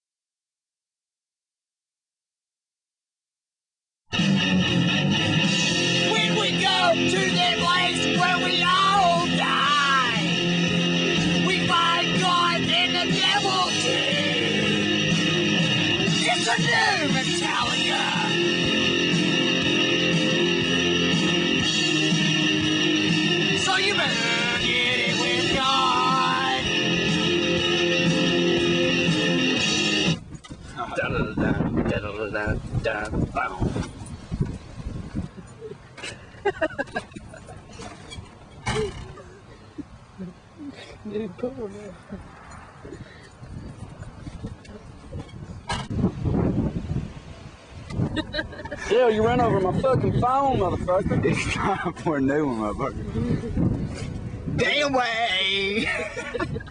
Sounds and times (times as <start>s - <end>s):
Music: 4.1s - 30.2s.